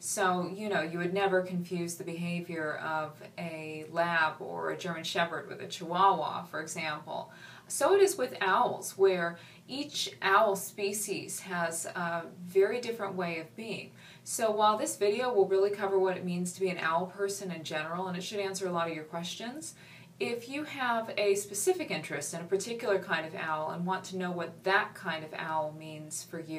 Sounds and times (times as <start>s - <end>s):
Speech: 0.0s - 26.5s.